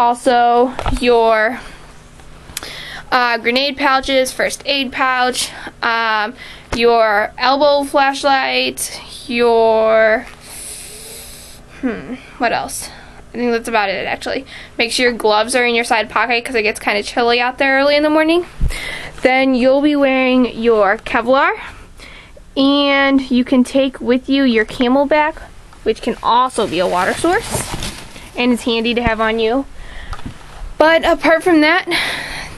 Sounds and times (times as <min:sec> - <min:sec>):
Speech: 0:00.0 - 0:01.6, 0:03.1 - 0:10.3, 0:11.8 - 0:18.5, 0:19.2 - 0:21.6, 0:22.6 - 0:27.6, 0:28.4 - 0:29.7, 0:30.8 - 0:32.0.